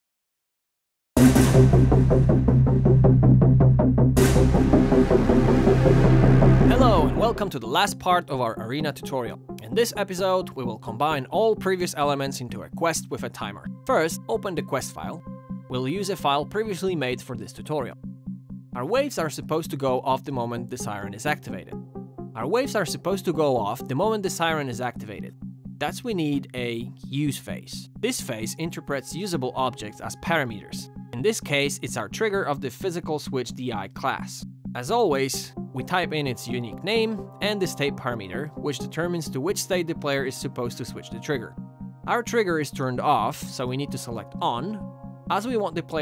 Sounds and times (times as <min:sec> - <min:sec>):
Music: 0:01.2 - 0:46.0
Speech: 0:06.7 - 0:18.0, 0:18.8 - 0:21.8, 0:22.4 - 0:41.5, 0:42.1 - 0:46.0.